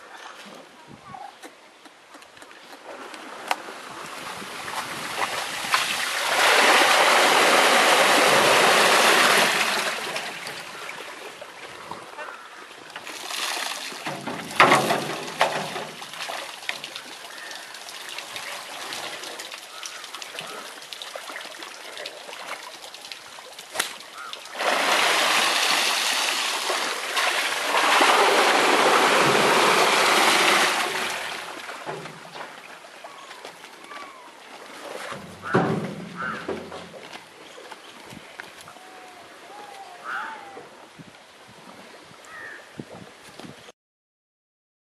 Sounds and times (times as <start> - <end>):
Water: 0.0 - 43.7
Pour: 13.1 - 31.8.